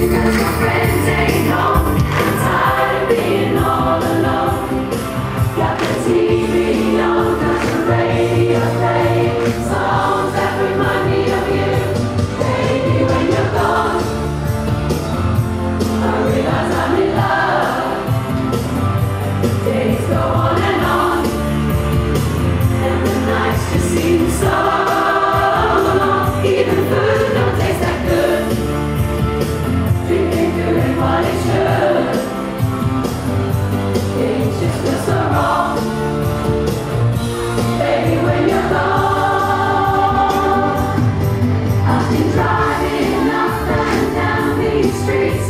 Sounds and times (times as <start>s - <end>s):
Choir: 0.0s - 14.6s, 15.8s - 32.9s, 33.9s - 45.5s
Rock and roll: 0.0s - 45.5s.